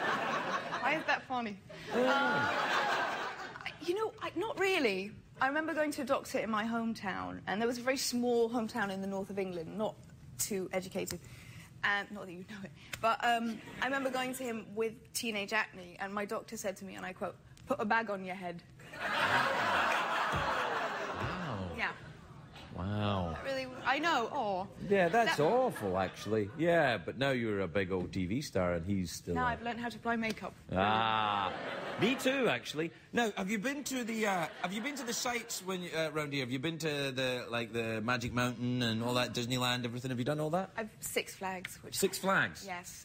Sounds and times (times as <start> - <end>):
Female speech, woman speaking: 0.8 - 2.4, 3.6 - 11.2, 11.8 - 18.7, 23.4 - 25.6, 29.3 - 30.6, 40.8 - 43.0.